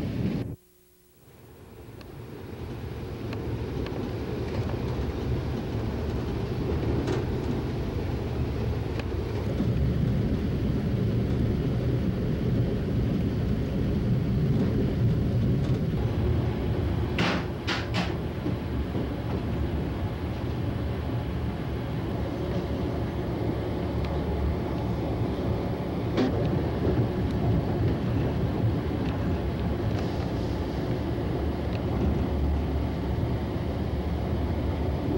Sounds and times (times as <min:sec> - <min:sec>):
Vehicle: 0:01.6 - 0:35.1.